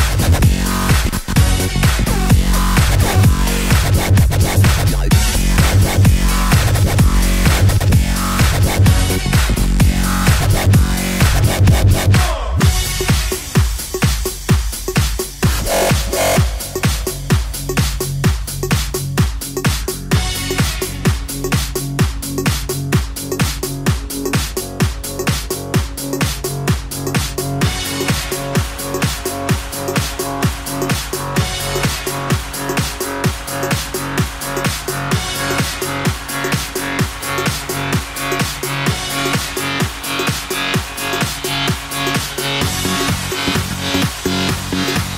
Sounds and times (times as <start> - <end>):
Disco: 0.0 - 45.1
Electronic dance music: 0.0 - 45.1.